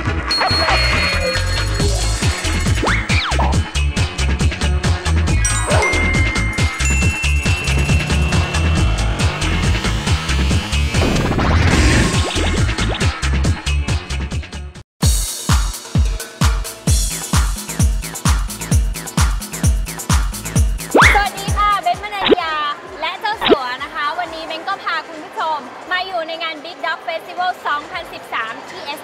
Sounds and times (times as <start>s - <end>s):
Music: 0.0s - 24.2s
Speech: 21.2s - 29.0s.